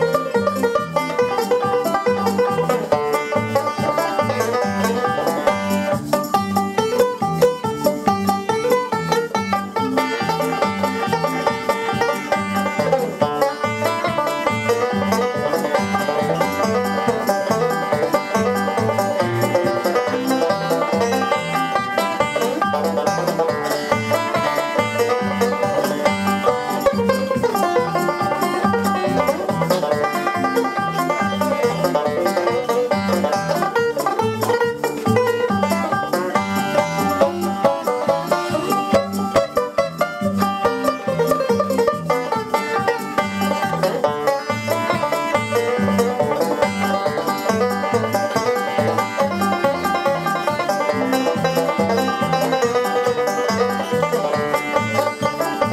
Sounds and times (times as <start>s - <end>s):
Banjo: 0.0s - 55.7s
Bluegrass: 0.0s - 55.7s.